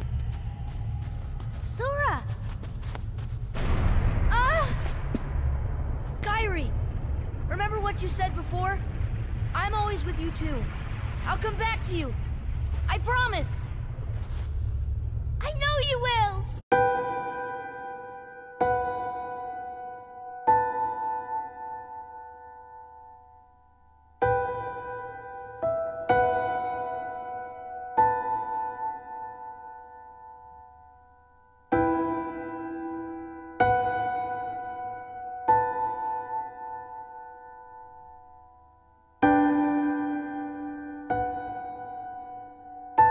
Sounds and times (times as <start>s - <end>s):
Music: 15.4s - 43.1s.